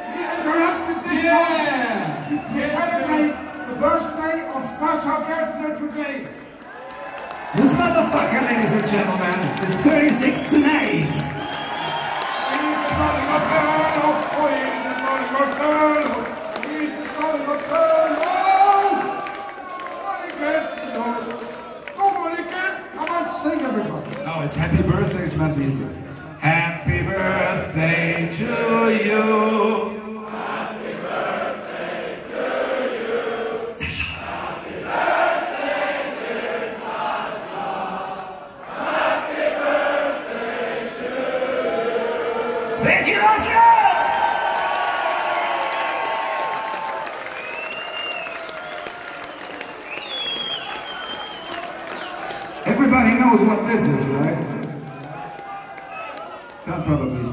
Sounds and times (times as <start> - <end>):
Speech: 0.1 - 6.3, 22.0 - 26.8, 52.7 - 54.6.